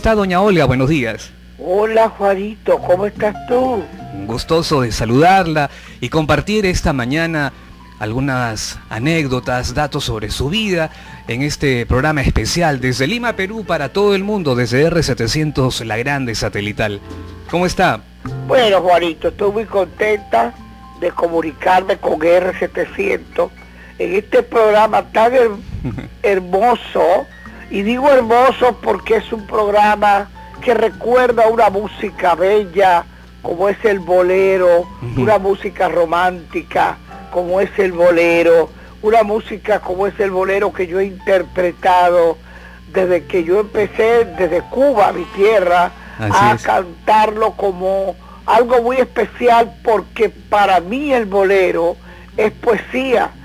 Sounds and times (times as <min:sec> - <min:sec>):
Speech: 0:00.0 - 0:53.4
Music: 0:02.3 - 0:53.4.